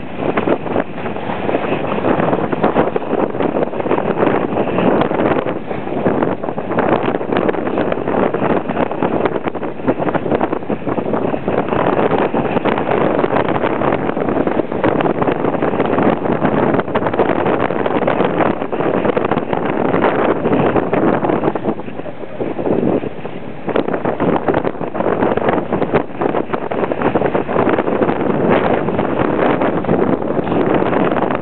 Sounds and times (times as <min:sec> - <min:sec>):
Wind noise (microphone): 0:00.0 - 0:31.4.